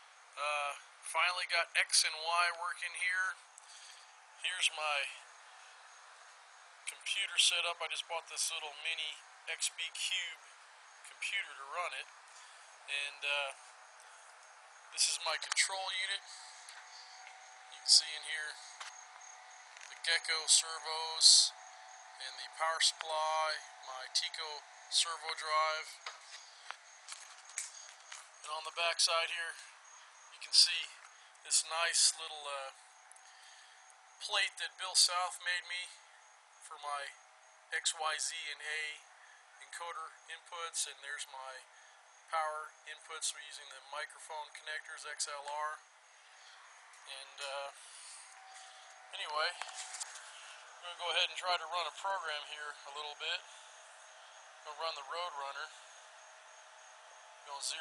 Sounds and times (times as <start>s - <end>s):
Speech: 0.4s - 3.4s, 4.4s - 5.2s, 6.9s - 10.4s, 11.1s - 12.0s, 12.9s - 13.6s, 15.0s - 16.4s, 17.8s - 18.6s, 20.0s - 21.6s, 22.2s - 26.0s, 28.4s - 29.7s, 30.4s - 32.8s, 34.2s - 36.0s, 36.6s - 39.0s, 39.6s - 41.6s, 42.3s - 45.8s, 47.1s - 47.8s, 49.1s - 49.7s, 50.8s - 53.5s, 54.7s - 55.8s, 57.5s - 57.8s.